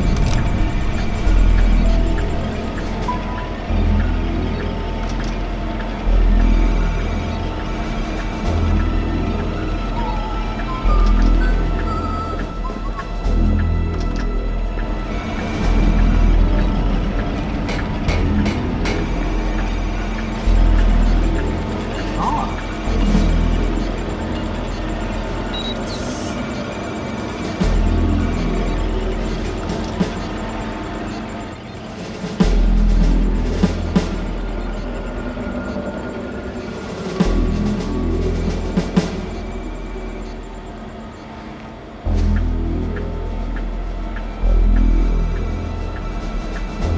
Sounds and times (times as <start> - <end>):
Music: 0.0 - 46.9.